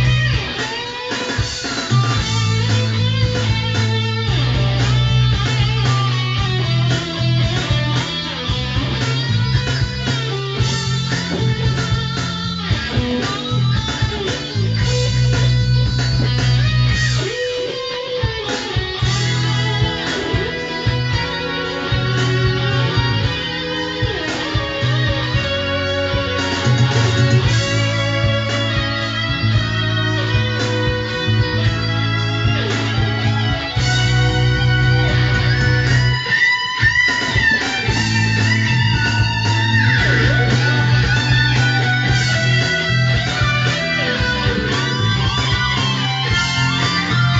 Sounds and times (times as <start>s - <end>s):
Music: 0.0s - 47.3s.